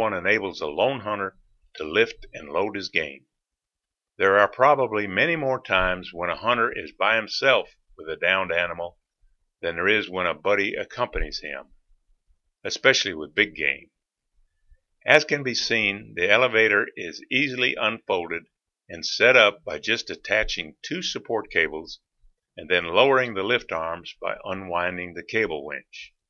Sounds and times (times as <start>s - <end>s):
Speech: 0.0s - 3.2s, 4.2s - 9.0s, 9.6s - 11.7s, 12.7s - 13.9s, 15.0s - 22.0s, 22.6s - 26.2s.